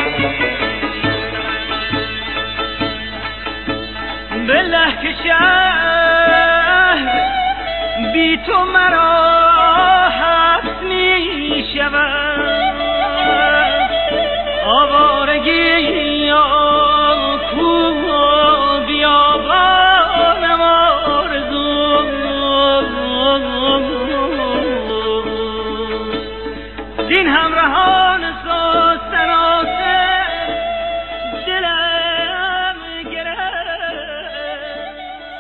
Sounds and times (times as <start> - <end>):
Middle Eastern music: 0.0 - 35.4.